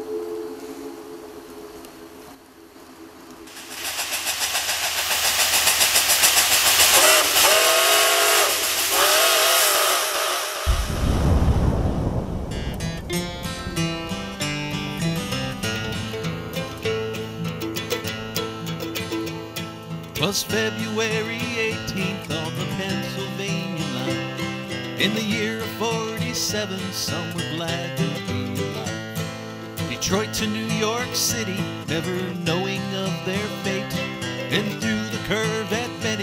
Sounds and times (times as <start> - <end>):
Music: 12.5 - 36.2.